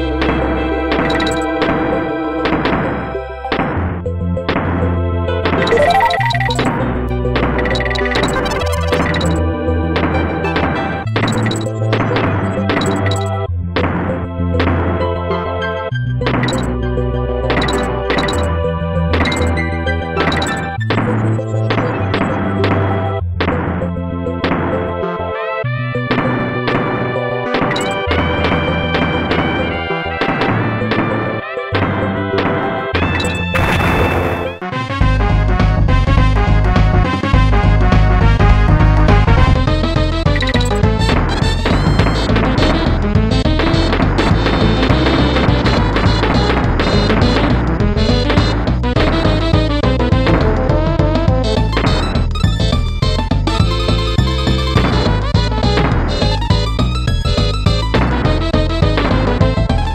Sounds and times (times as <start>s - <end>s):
Music: 0.0s - 59.9s.